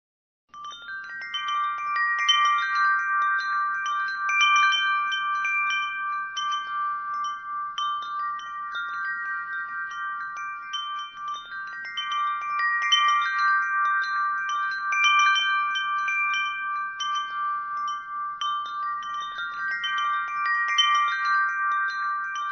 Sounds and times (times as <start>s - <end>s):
Wind chime: 0.5s - 22.5s.